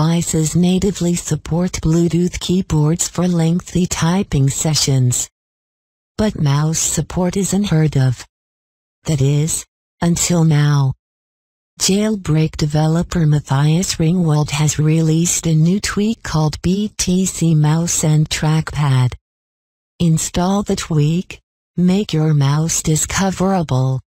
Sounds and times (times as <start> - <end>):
Speech: 0.0 - 5.3, 6.2 - 8.3, 9.1 - 11.0, 11.8 - 19.2, 20.0 - 24.1.